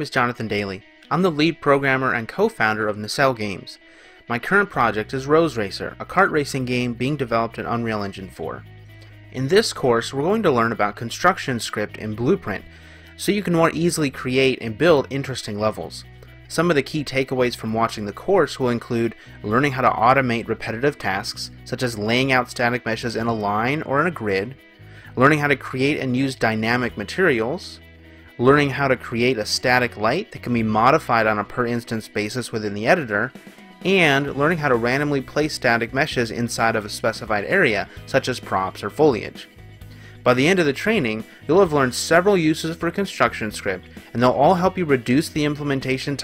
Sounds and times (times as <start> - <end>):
Speech: 0.0 - 8.6, 9.4 - 27.8, 28.4 - 39.5, 40.2 - 46.2
Music: 0.0 - 46.2.